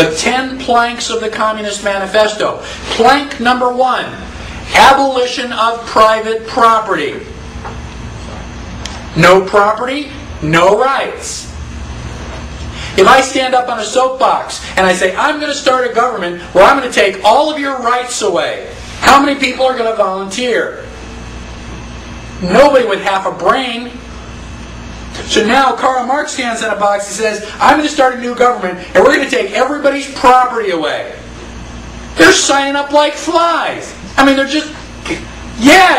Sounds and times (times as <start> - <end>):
Narration, monologue: 0.0 - 35.9.